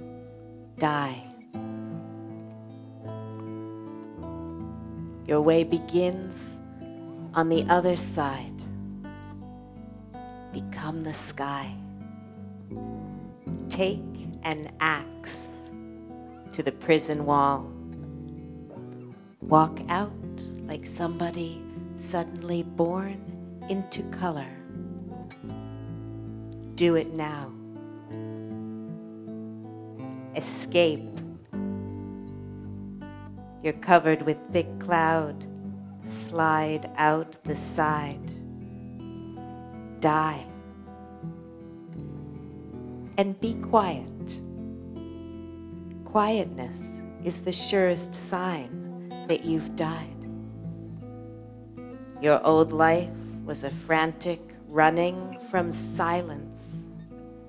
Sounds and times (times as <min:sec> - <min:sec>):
Music: 0:00.0 - 0:57.4
Speech: 0:00.8 - 0:01.4, 0:05.3 - 0:06.6, 0:07.4 - 0:08.6, 0:10.6 - 0:11.8, 0:13.7 - 0:15.7, 0:16.5 - 0:17.7, 0:19.4 - 0:24.6, 0:26.8 - 0:27.6, 0:30.4 - 0:31.2, 0:33.6 - 0:35.4, 0:36.1 - 0:38.3, 0:40.0 - 0:40.5, 0:43.2 - 0:44.4, 0:46.1 - 0:48.7, 0:49.3 - 0:50.2, 0:52.2 - 0:56.8.